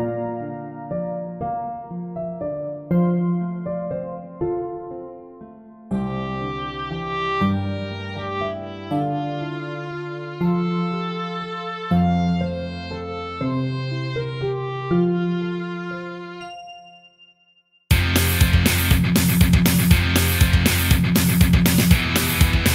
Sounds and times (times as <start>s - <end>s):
Funk: 17.9s - 22.7s
Grunge: 17.9s - 22.7s
Punk rock: 17.9s - 22.7s
Rock and roll: 17.9s - 22.7s.